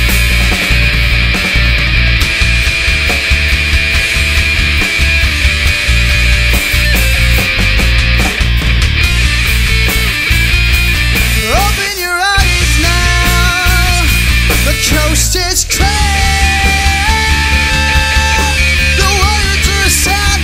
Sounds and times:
Heavy metal: 0.0 - 20.4
Progressive rock: 0.0 - 20.4
Punk rock: 0.0 - 20.4
Rock and roll: 0.0 - 20.4.

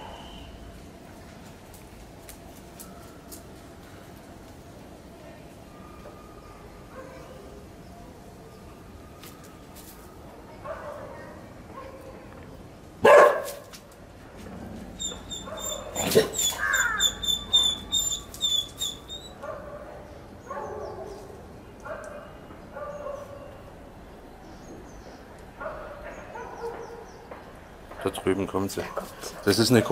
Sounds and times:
Outside, rural or natural: 0.0 - 29.9
Animal: 14.4 - 19.4.

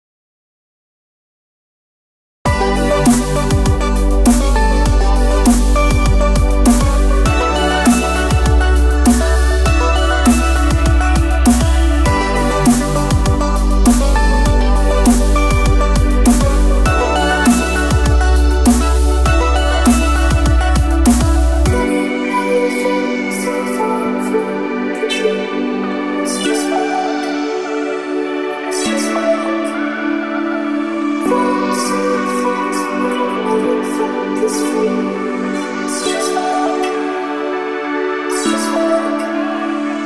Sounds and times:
Dubstep: 2.5 - 30.0.

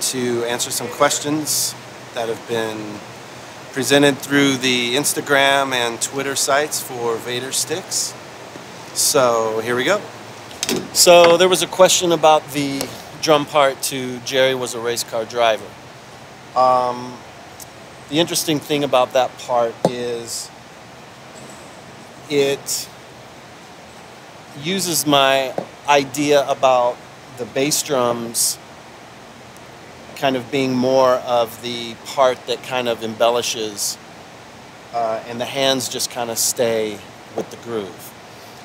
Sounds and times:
Speech: 0.0 - 3.0, 3.7 - 8.2, 9.0 - 10.1, 11.0 - 15.8, 16.6 - 17.2, 18.1 - 20.5, 22.3 - 22.9, 24.6 - 28.6, 30.2 - 34.0, 35.0 - 38.1.

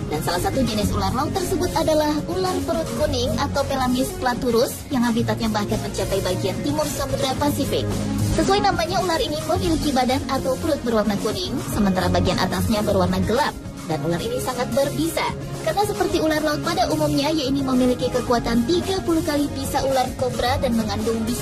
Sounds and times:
Music: 0.0 - 21.4
Speech: 0.0 - 21.4.

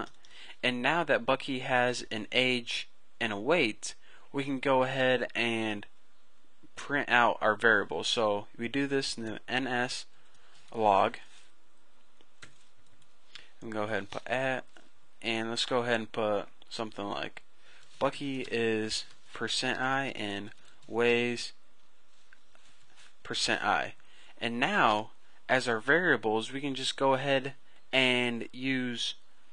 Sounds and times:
Speech: 0.0 - 5.9, 6.8 - 10.1, 10.7 - 11.3, 13.6 - 21.6, 23.2 - 29.2.

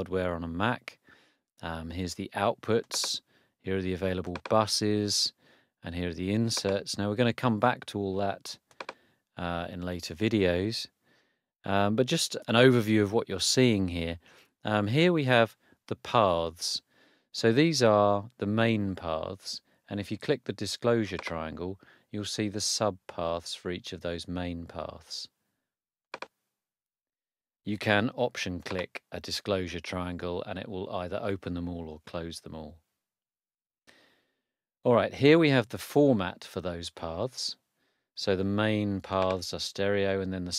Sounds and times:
Speech: 0.0 - 1.0, 1.6 - 8.6, 9.4 - 11.0, 11.7 - 16.8, 17.4 - 25.4, 27.7 - 32.8, 34.9 - 37.6, 38.2 - 40.5.

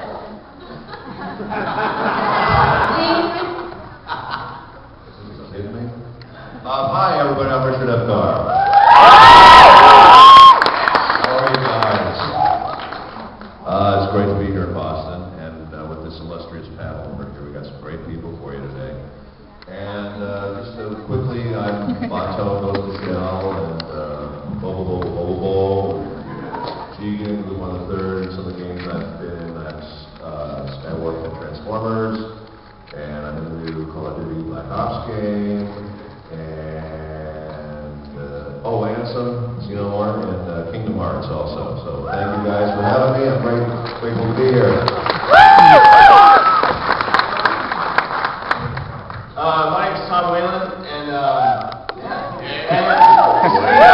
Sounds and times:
Crowd: 0.0 - 18.0, 19.0 - 36.5, 40.0 - 53.9
Cheering: 8.4 - 13.0, 45.0 - 47.7, 51.3 - 53.9.

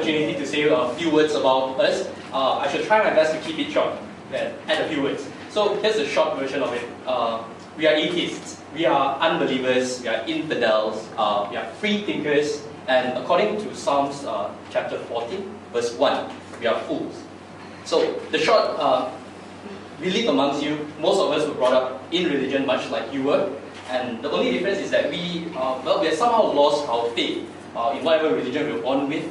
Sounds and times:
Male speech, man speaking: 0.0 - 17.3, 17.9 - 19.2, 20.0 - 29.3
Narration, monologue: 0.0 - 29.3.

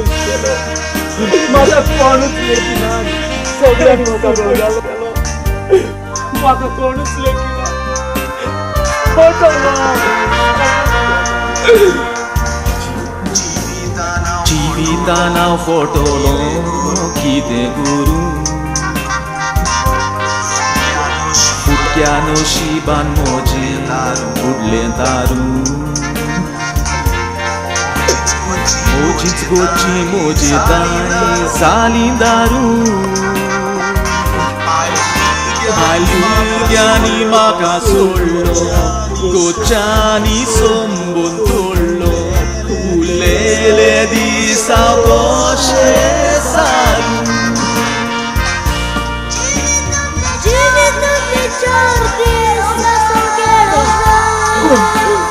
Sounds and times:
Music: 0.0 - 55.3
Male singing: 13.2 - 18.6, 21.4 - 26.6, 28.5 - 48.3, 49.4 - 55.3.

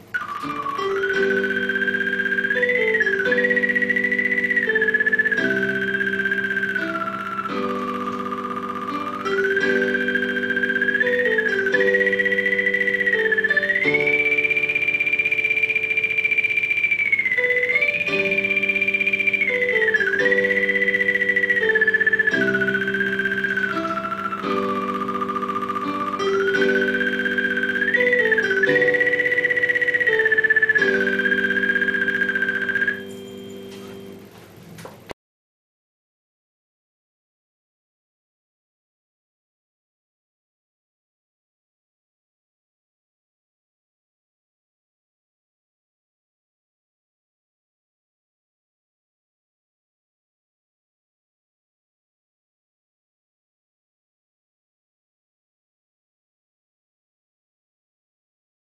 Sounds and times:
Theremin: 0.0 - 34.3.

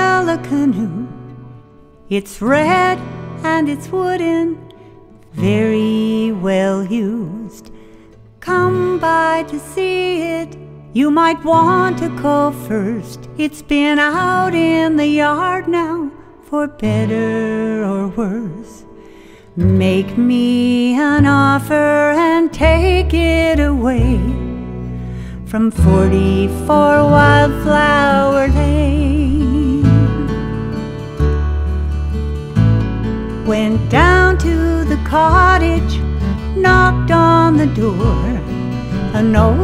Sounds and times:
Music: 0.0 - 39.6.

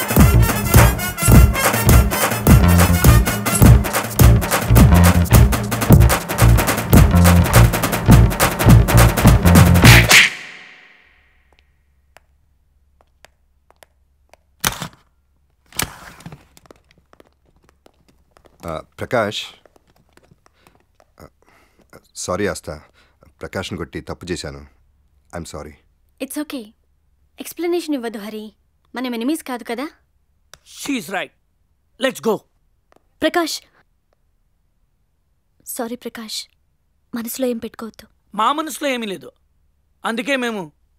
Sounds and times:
Music: 0.0 - 10.3.

